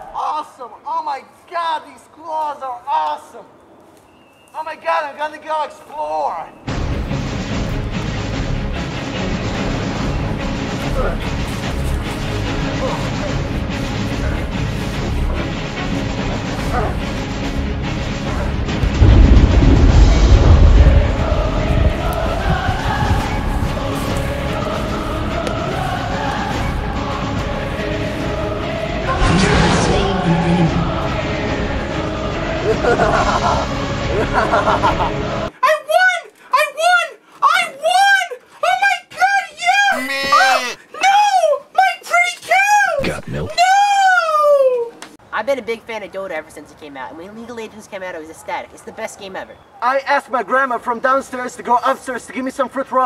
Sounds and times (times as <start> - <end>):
Music: 6.7 - 35.5.